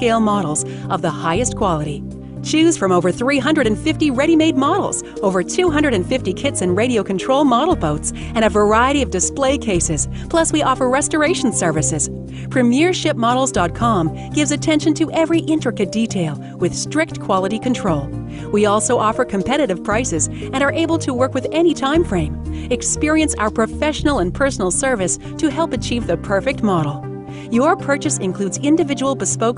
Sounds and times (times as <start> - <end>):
Music: 0.0 - 29.5
Speech: 0.0 - 29.5.